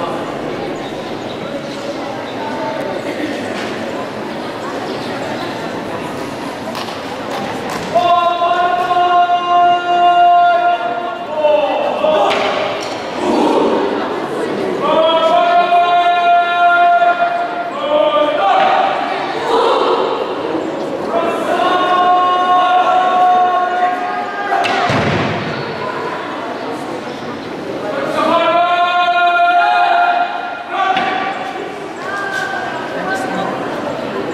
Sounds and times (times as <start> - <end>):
Speech: 0.0 - 34.3.